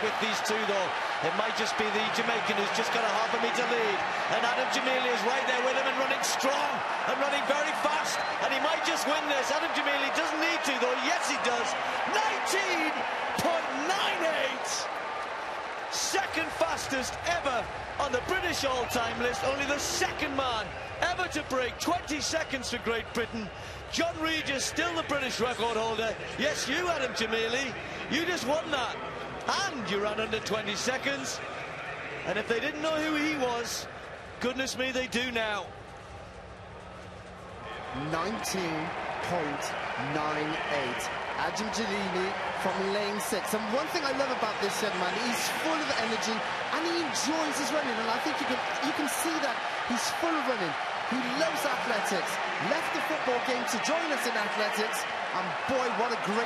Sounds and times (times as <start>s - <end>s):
Speech: 0.0s - 14.9s, 15.9s - 31.4s, 32.3s - 35.7s, 37.9s - 56.4s.